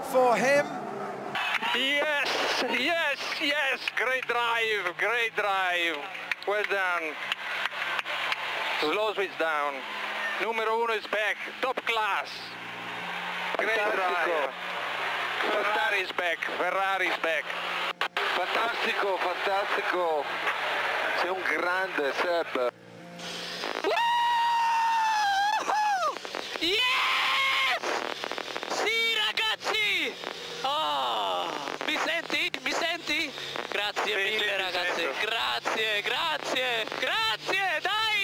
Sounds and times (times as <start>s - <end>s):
Radio: 1.4s - 7.2s, 13.5s - 14.6s, 15.3s - 23.9s, 25.6s - 27.0s, 27.7s - 38.2s
Speech: 28.8s - 38.2s.